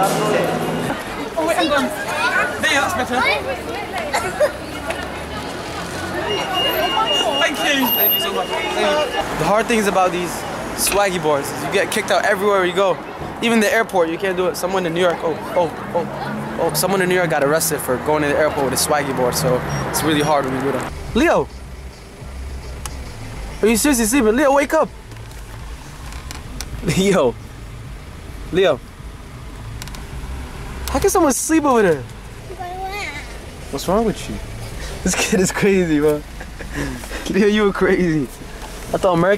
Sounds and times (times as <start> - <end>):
Outside, urban or manmade: 0.0 - 39.3.